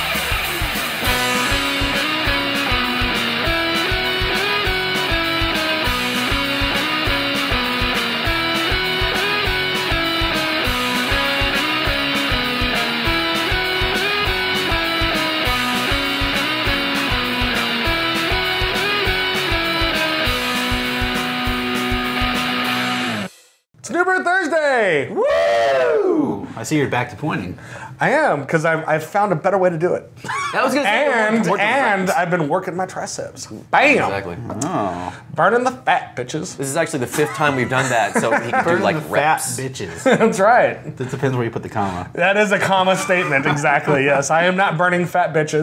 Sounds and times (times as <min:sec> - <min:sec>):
Speech: 0:23.8 - 0:25.1, 0:26.2 - 0:45.6.